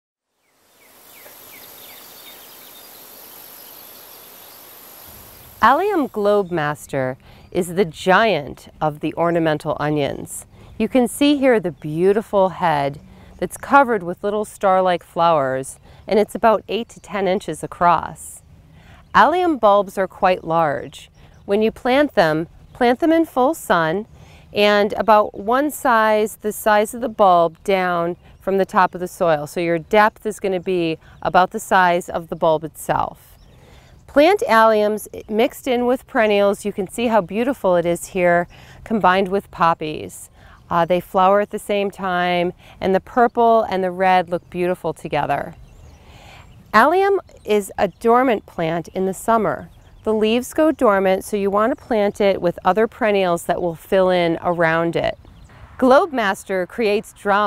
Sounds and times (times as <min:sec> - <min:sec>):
Outside, rural or natural: 0:00.2 - 0:57.4
Speech: 0:05.6 - 0:18.4, 0:19.1 - 0:33.2, 0:34.1 - 0:45.5, 0:46.8 - 0:55.2, 0:55.8 - 0:57.4.